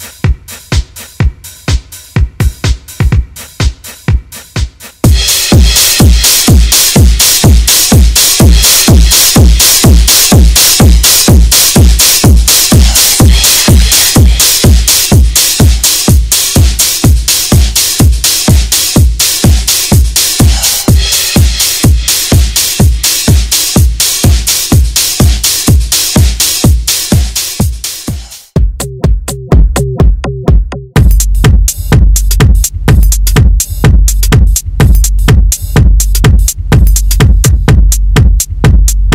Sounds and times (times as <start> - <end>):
House music: 0.0 - 39.1.